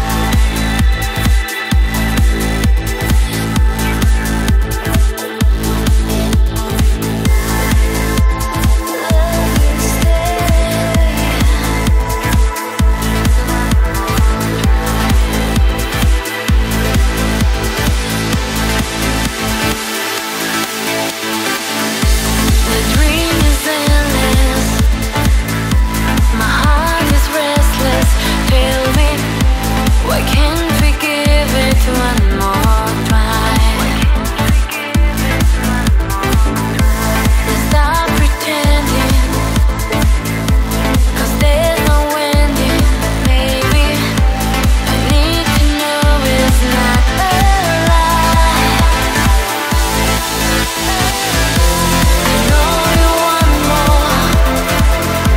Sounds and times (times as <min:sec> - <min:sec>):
Music: 0:00.0 - 0:55.3.